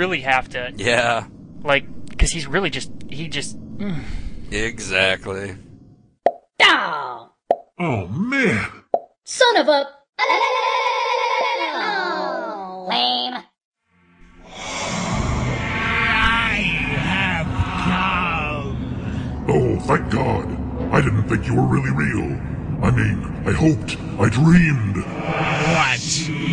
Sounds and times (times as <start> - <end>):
Speech: 0.0 - 3.5, 6.6 - 9.9, 19.5 - 26.3.